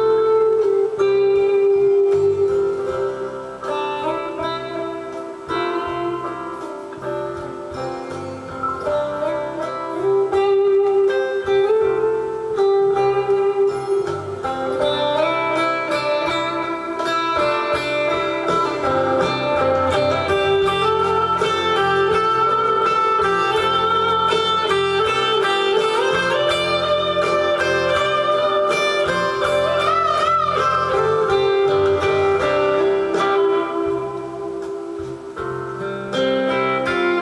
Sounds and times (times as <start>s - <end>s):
Acoustic guitar: 0.0s - 37.2s
Strum: 0.0s - 37.2s.